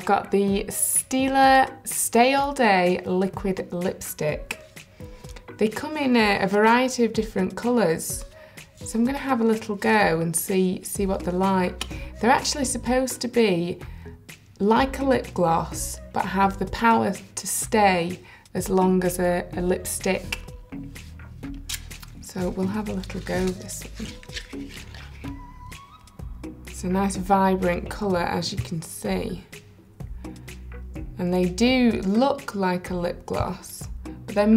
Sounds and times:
Speech: 0.0 - 4.6, 5.6 - 8.3, 8.9 - 13.8, 14.6 - 20.5, 22.2 - 24.2, 26.8 - 29.5, 31.2 - 34.5
Music: 0.0 - 34.5.

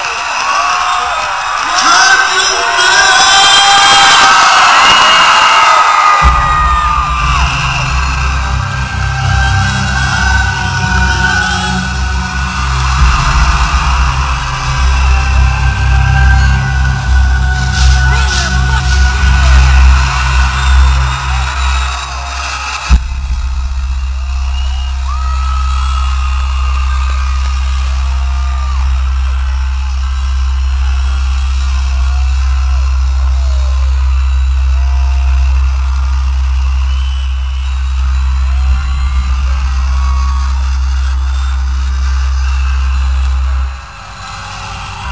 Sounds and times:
Rhythm and blues: 5.4 - 45.1
Theme music: 5.4 - 45.1.

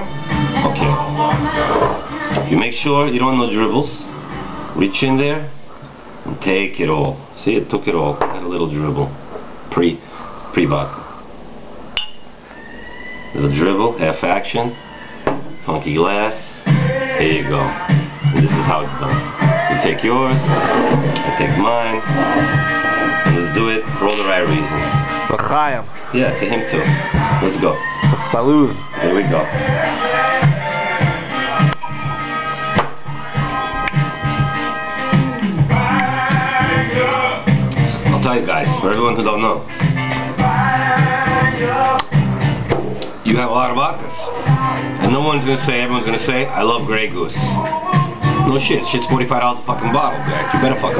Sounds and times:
Music: 0.0 - 5.6, 13.2 - 50.9
Speech: 2.4 - 4.1, 4.8 - 5.5, 6.3 - 10.0, 10.6 - 11.0, 13.4 - 14.8, 15.6 - 16.6, 17.2 - 17.8, 18.4 - 22.1, 23.3 - 29.6, 38.1 - 39.6, 43.2 - 44.4, 45.0 - 47.6, 48.4 - 50.9.

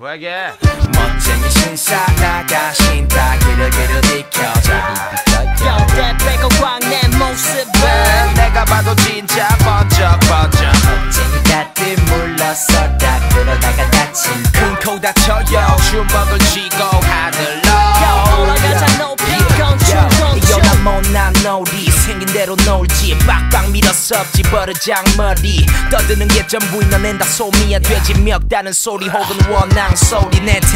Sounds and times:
Music: 0.6 - 30.7.

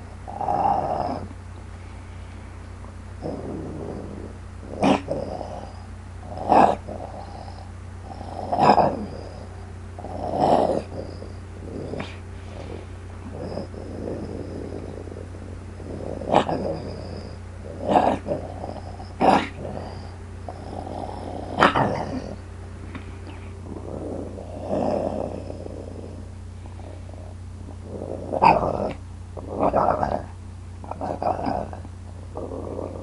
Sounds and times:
Growling: 0.3 - 1.4, 3.2 - 33.0.

